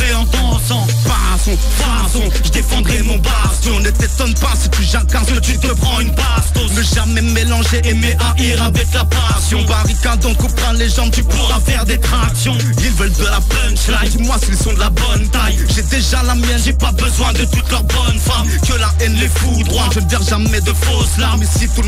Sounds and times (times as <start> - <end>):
Hip hop music: 0.0 - 21.8
Rapping: 0.0 - 21.8.